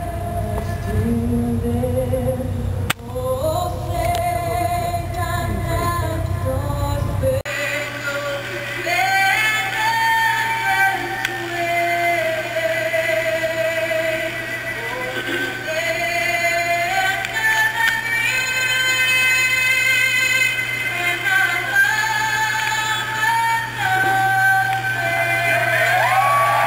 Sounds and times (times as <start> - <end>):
Synthetic singing: 0.0 - 25.9.